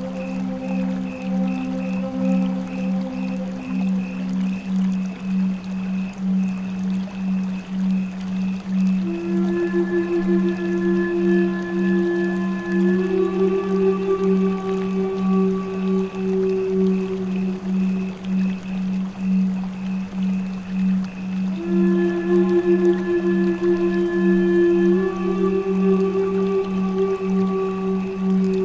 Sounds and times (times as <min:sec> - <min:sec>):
Flute: 0:00.0 - 0:28.6
Background music: 0:09.0 - 0:18.2, 0:21.6 - 0:28.6
Tender music: 0:21.6 - 0:28.6.